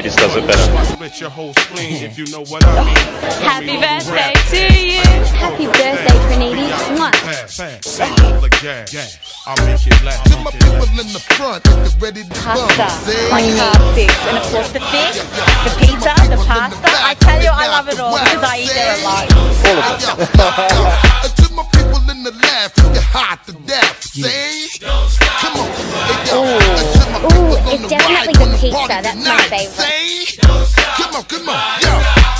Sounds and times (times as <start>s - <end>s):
Speech: 0.0s - 1.1s, 1.7s - 7.2s, 12.4s - 20.9s, 26.3s - 29.8s
Hip hop music: 0.0s - 32.3s.